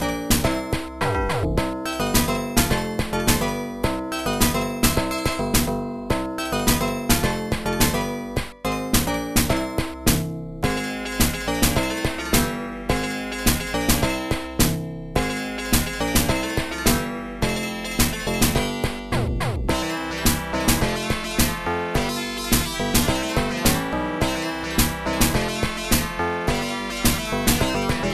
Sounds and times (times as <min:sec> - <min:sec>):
Theme music: 0:15.5 - 0:28.1.